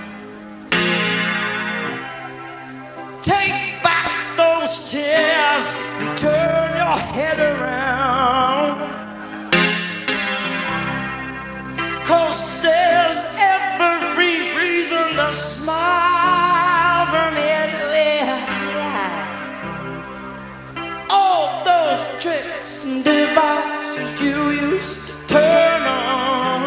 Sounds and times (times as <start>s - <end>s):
Music: 0.0s - 26.6s.